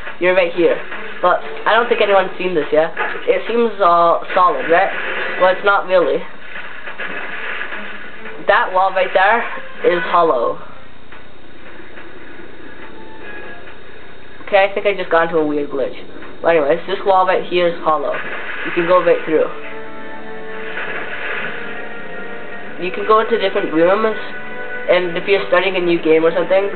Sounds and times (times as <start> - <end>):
Music: 0.0 - 3.8, 7.0 - 14.4, 18.2 - 26.7
Speech: 0.2 - 6.3, 8.5 - 10.6, 14.5 - 19.6, 22.8 - 26.7.